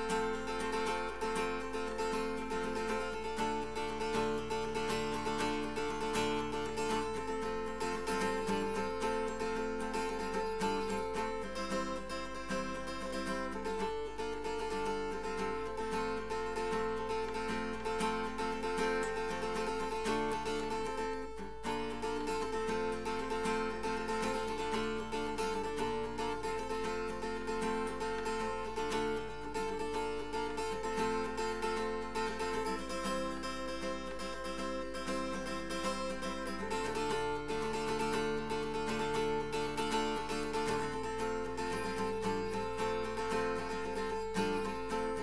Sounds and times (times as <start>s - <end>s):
Acoustic guitar: 0.0s - 45.2s.